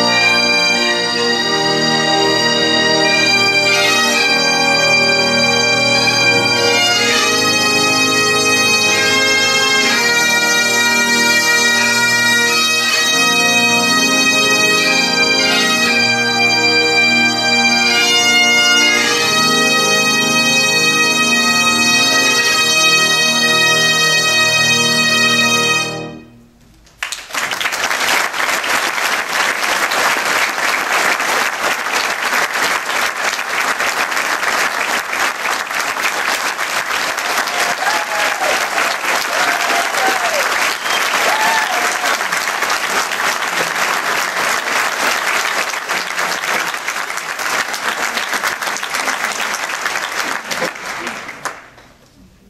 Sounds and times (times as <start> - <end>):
Applause: 26.9 - 52.0.